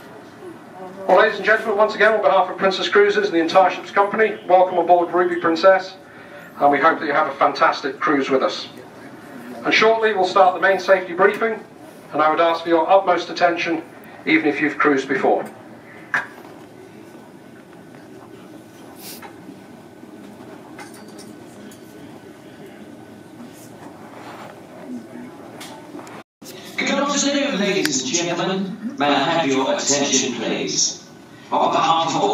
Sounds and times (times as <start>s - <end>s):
Speech: 0.0s - 6.0s, 6.6s - 15.5s, 26.5s - 32.3s.